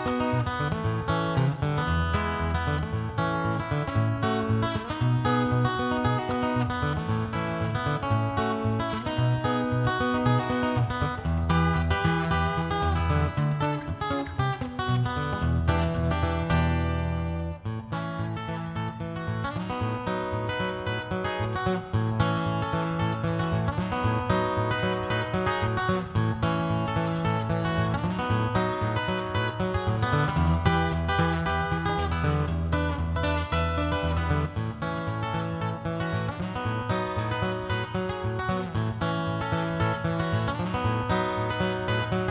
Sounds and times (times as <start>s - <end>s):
Acoustic guitar: 0.0s - 42.3s.